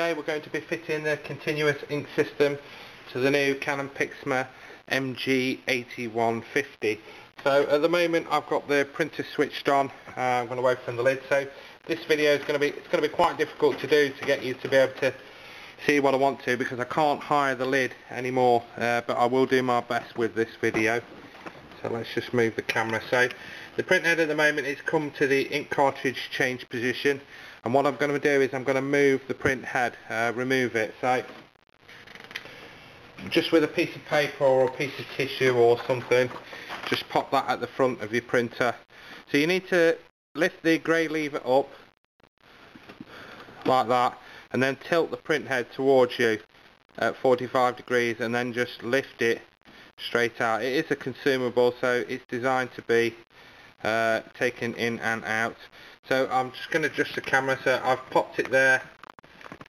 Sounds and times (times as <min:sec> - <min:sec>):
Speech: 0:00.0 - 0:15.2, 0:15.8 - 0:21.1, 0:21.8 - 0:31.3, 0:33.2 - 0:41.7, 0:43.6 - 0:53.2, 0:53.8 - 0:59.0.